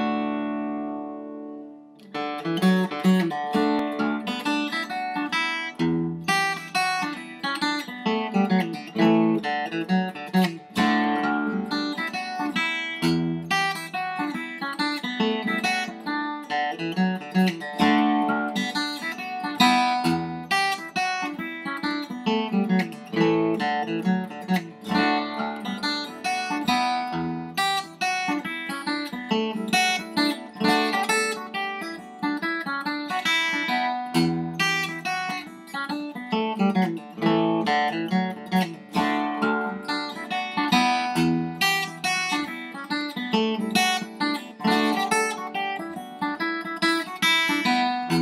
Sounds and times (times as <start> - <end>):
Guitar: 0.0 - 48.2.